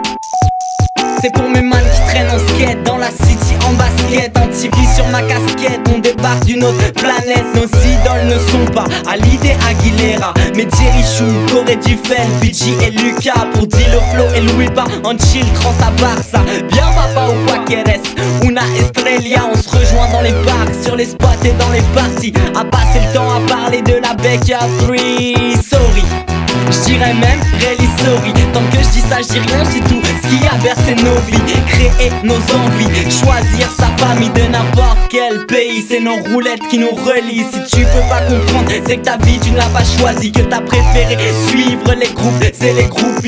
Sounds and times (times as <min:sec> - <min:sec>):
Music: 0:00.0 - 0:43.2.